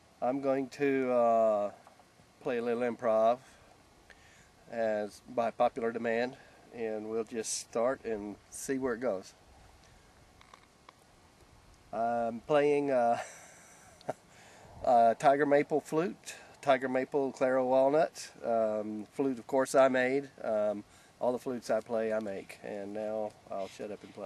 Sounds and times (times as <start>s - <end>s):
Speech: 0.2s - 1.8s, 2.4s - 3.5s, 4.7s - 9.4s, 12.0s - 13.2s, 14.8s - 24.2s.